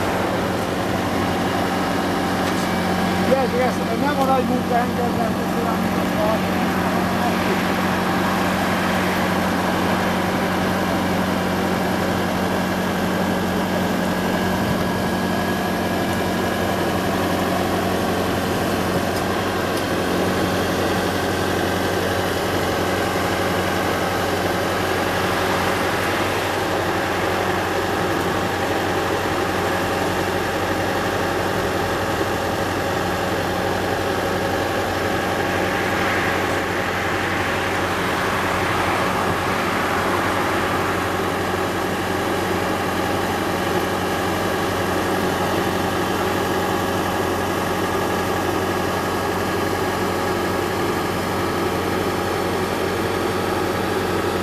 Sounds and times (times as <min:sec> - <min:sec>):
Vehicle: 0:00.0 - 0:54.4.